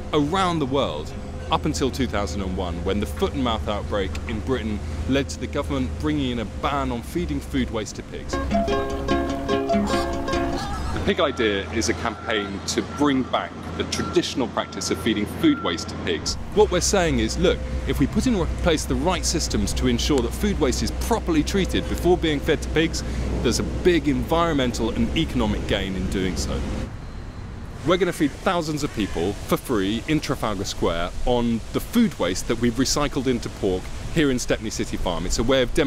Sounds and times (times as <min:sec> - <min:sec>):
Speech: 0:00.1 - 0:08.4, 0:09.7 - 0:10.2, 0:11.0 - 0:26.6, 0:27.8 - 0:35.8.